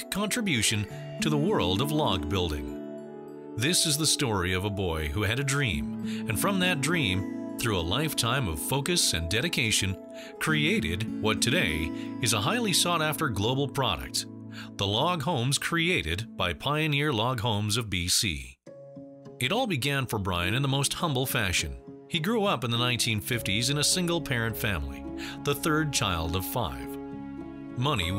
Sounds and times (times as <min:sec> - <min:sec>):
Speech: 0:00.0 - 0:02.8, 0:03.6 - 0:18.6, 0:19.4 - 0:27.0, 0:27.8 - 0:28.1
Music: 0:00.0 - 0:28.1.